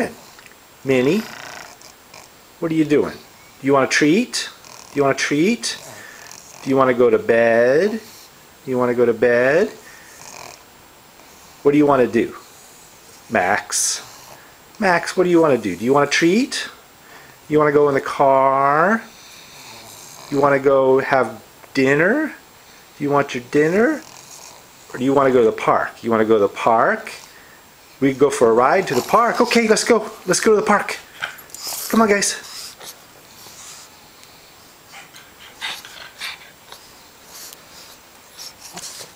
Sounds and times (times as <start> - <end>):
Speech: 0.0 - 0.2, 0.8 - 1.4, 2.6 - 5.9, 6.6 - 9.9, 11.6 - 12.4, 13.3 - 14.1, 14.8 - 16.8, 17.5 - 19.1, 20.3 - 22.4, 23.0 - 24.1, 24.9 - 27.3, 28.0 - 31.1, 31.8 - 32.5
Dog: 34.9 - 39.1.